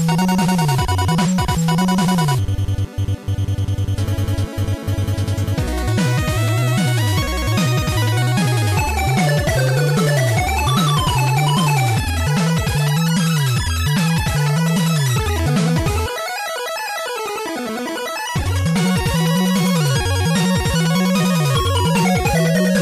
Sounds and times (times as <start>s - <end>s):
Music: 0.0s - 22.8s.